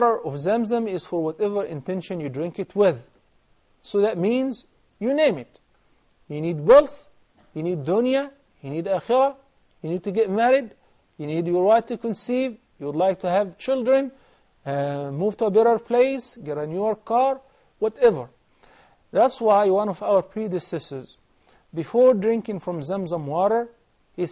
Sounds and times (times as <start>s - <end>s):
Speech: 0.0s - 3.1s, 3.8s - 5.6s, 6.3s - 18.3s, 19.2s - 21.2s, 21.8s - 24.3s.